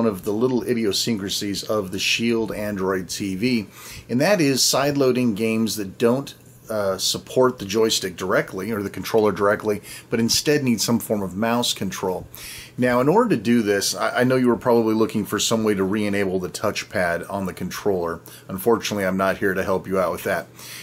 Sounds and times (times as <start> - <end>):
Speech: 0.0 - 20.5.